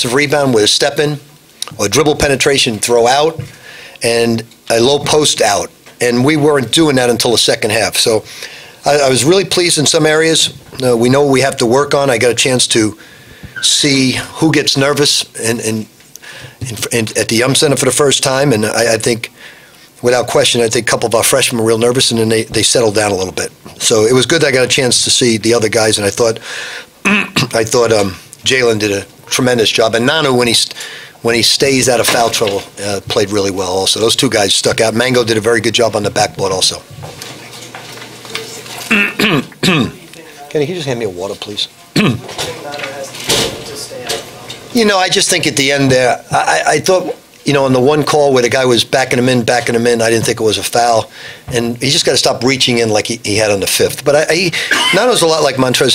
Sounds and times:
Speech: 0.0 - 13.0, 13.6 - 15.9, 16.6 - 19.3, 20.0 - 26.4, 27.4 - 36.9, 39.6 - 55.9.

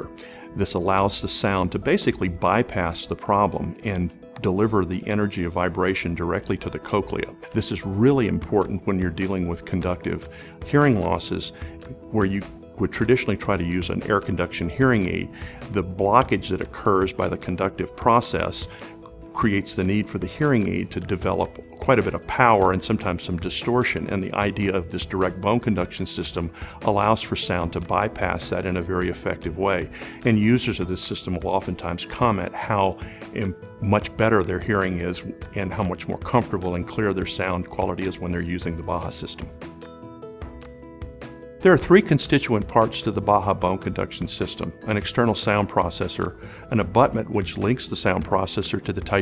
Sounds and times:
Speech: 0.0 - 18.7, 19.4 - 39.5, 41.6 - 49.2
Music: 0.0 - 49.2.

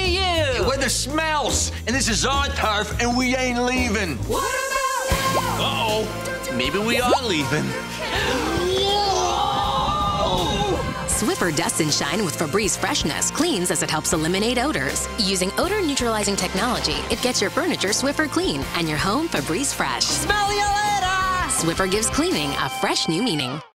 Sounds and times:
Music: 0.0 - 23.7.

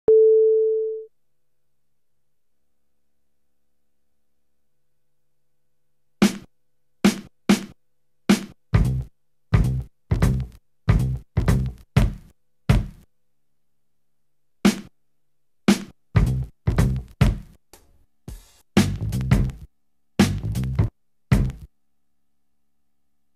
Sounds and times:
Drum machine: 6.2 - 6.5, 7.1 - 13.1, 14.7 - 14.9, 15.7 - 21.7.

